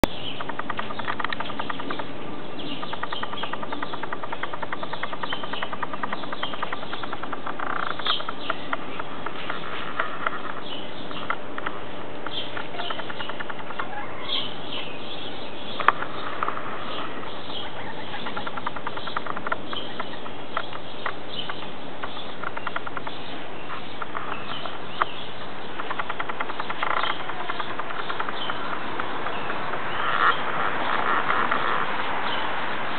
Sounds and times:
Bird: 0.0s - 32.9s.

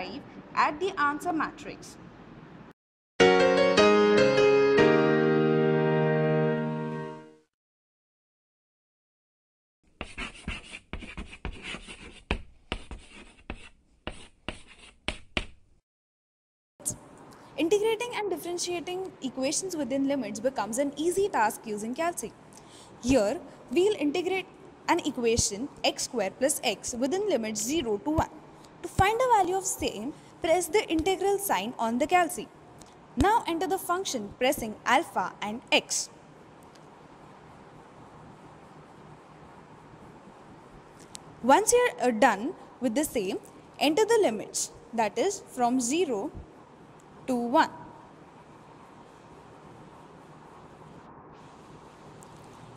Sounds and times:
Speech: 0.0s - 2.0s, 17.6s - 22.3s, 23.0s - 32.5s, 33.2s - 36.1s, 41.4s - 46.4s, 47.3s - 47.8s
Writing: 9.9s - 15.6s.

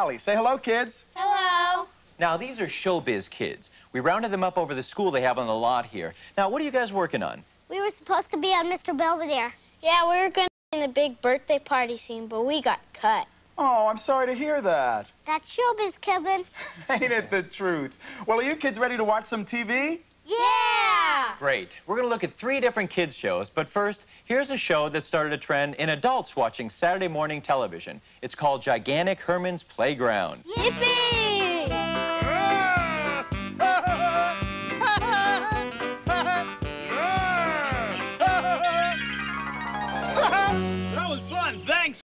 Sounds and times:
Music: 30.6s - 42.0s.

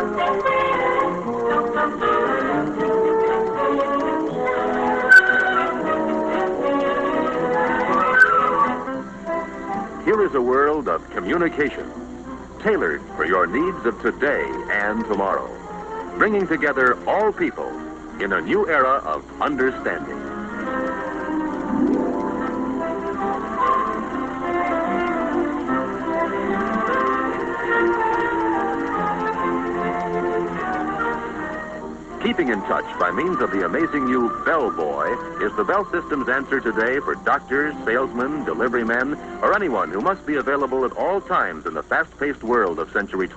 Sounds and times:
Music: 0.0s - 43.3s
Speech: 10.0s - 11.9s, 12.6s - 15.6s, 16.2s - 20.2s, 32.2s - 43.3s.

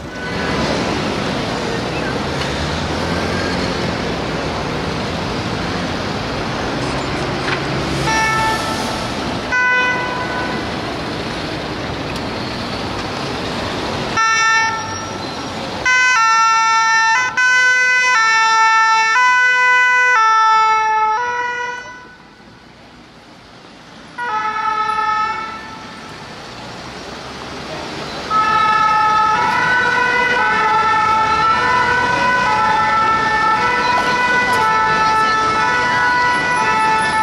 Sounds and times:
Ambulance (siren): 9.5s - 10.7s, 14.2s - 15.2s, 15.8s - 22.5s, 24.2s - 26.1s, 28.2s - 37.2s.

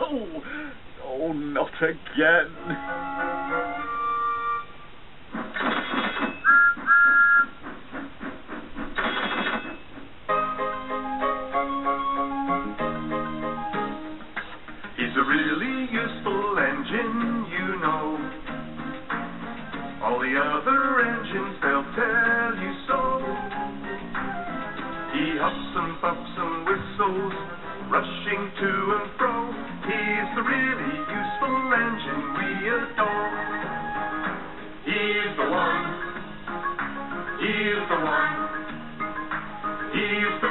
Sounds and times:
Music: 2.5s - 4.8s, 6.4s - 7.6s, 10.3s - 40.5s.

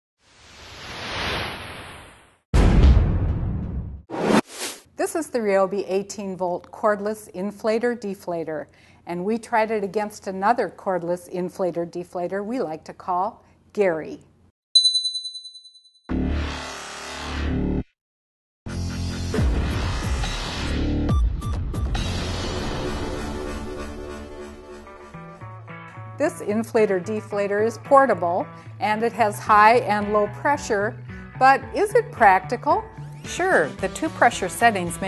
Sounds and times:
Speech: 5.0s - 14.2s, 26.2s - 35.0s.

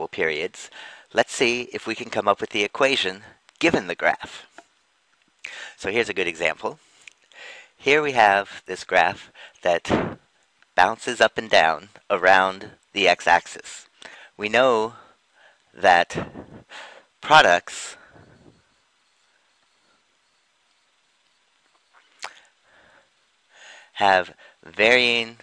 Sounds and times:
Speech: 0.0s - 4.6s, 5.8s - 6.8s, 7.8s - 10.2s, 10.8s - 15.1s, 15.8s - 16.4s, 17.2s - 18.0s, 24.0s - 25.4s.

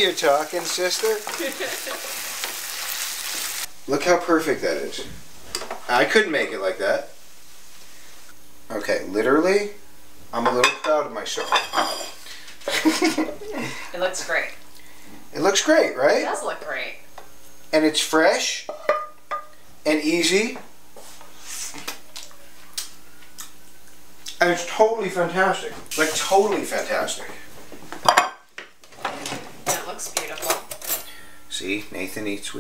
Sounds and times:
Speech: 0.0s - 1.3s, 24.3s - 27.5s, 31.5s - 32.6s.

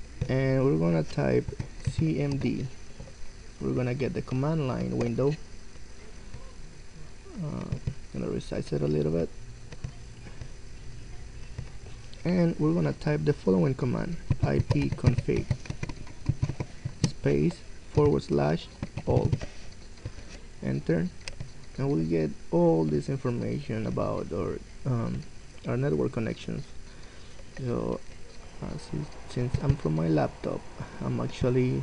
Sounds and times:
Speech: 0.2s - 2.8s, 3.6s - 5.4s, 7.3s - 9.4s, 12.2s - 15.5s, 17.0s - 19.5s, 20.6s - 21.2s, 21.8s - 26.7s, 27.6s - 28.0s, 28.6s - 31.8s.

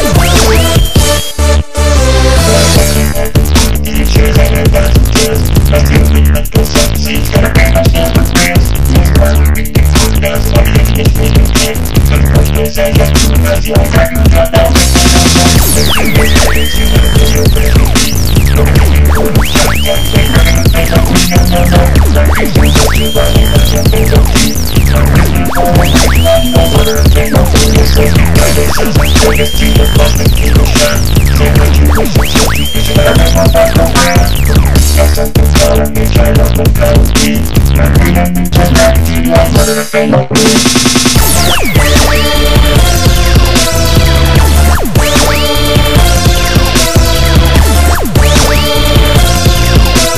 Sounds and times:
Dubstep: 0.0s - 50.1s
Sampler: 0.0s - 50.1s.

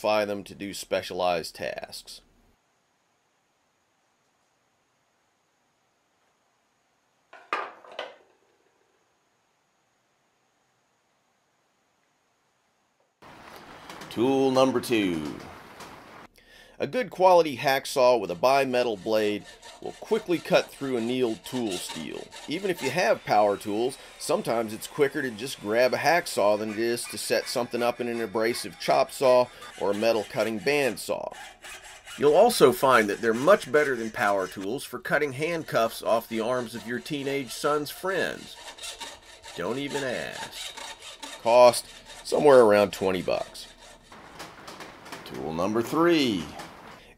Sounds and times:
Speech: 0.0s - 2.2s, 14.1s - 15.4s, 16.8s - 31.4s, 32.2s - 38.6s, 39.6s - 40.6s, 41.4s - 43.7s, 45.3s - 46.6s.

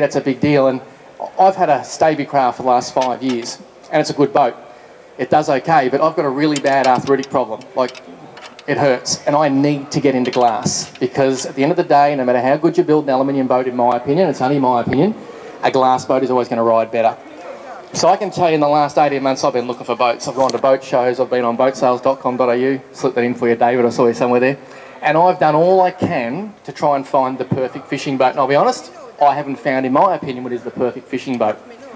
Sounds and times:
Speech: 0.0s - 4.6s, 5.2s - 8.0s, 8.7s - 31.9s.

